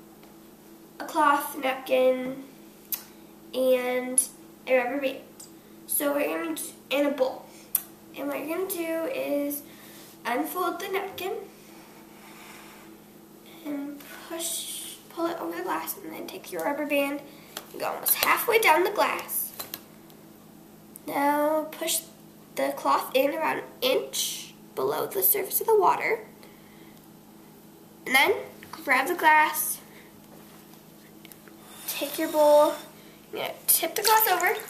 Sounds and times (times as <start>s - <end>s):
Speech: 1.0s - 2.5s, 3.6s - 5.3s, 5.9s - 7.5s, 8.2s - 9.6s, 10.2s - 11.5s, 13.6s - 19.5s, 21.0s - 26.3s, 28.1s - 29.9s, 31.9s - 34.6s.